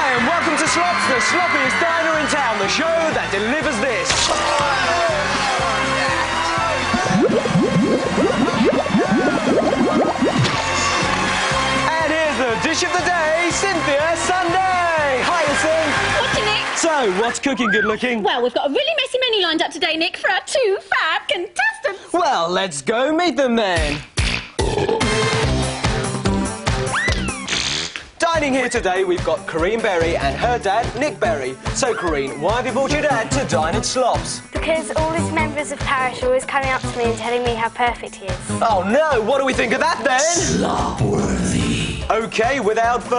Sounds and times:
Music: 0.0 - 18.9, 23.6 - 43.1.

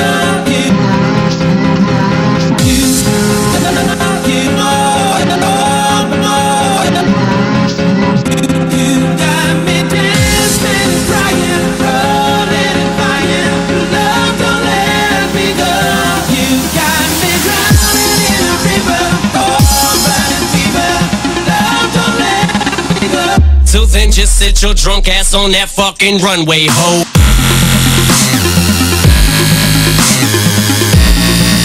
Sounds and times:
Dubstep: 0.0 - 31.6.

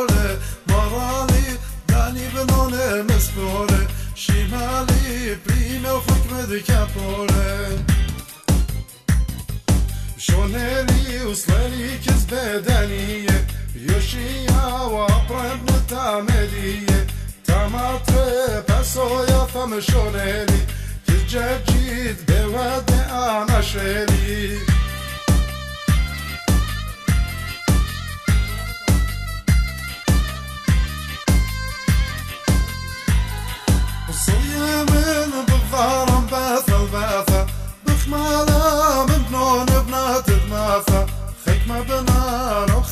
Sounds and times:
Music: 0.0 - 42.9.

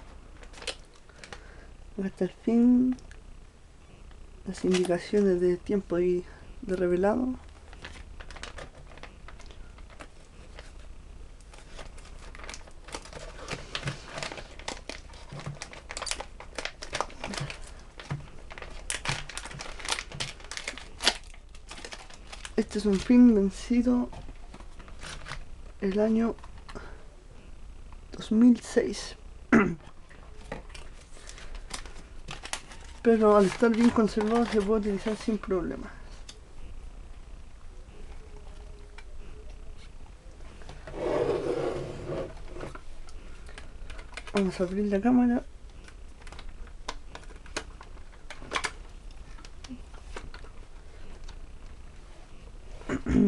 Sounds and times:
Speech: 4.5 - 7.4, 22.6 - 24.1, 33.0 - 36.1, 44.3 - 45.5.

